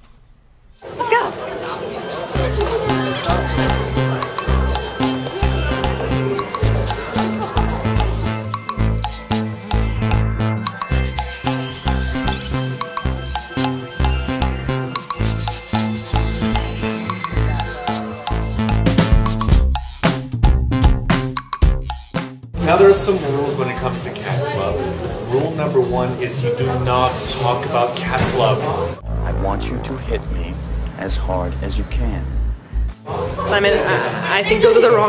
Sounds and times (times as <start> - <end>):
Music: 2.2 - 35.0.